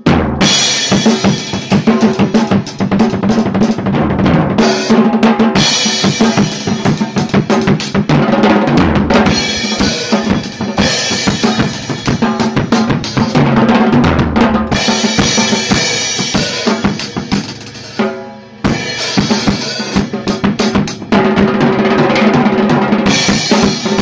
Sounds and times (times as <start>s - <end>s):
Bass drum: 0.0s - 24.0s
Drum kit: 0.0s - 24.0s.